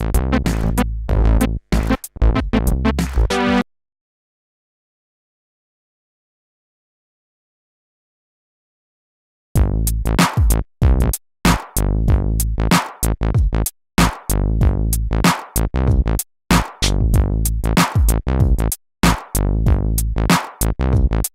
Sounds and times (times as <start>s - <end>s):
Drum machine: 0.0s - 3.6s, 9.6s - 21.3s.